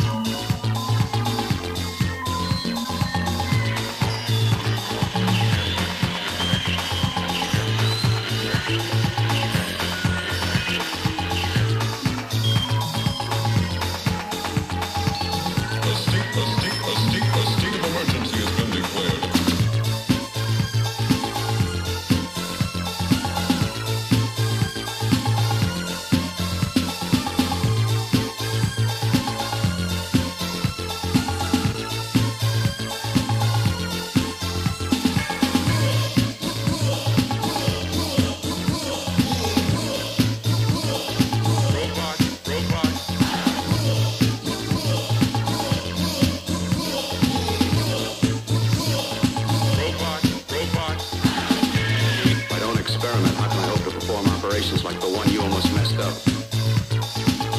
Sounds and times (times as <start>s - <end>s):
Techno: 0.0s - 57.5s.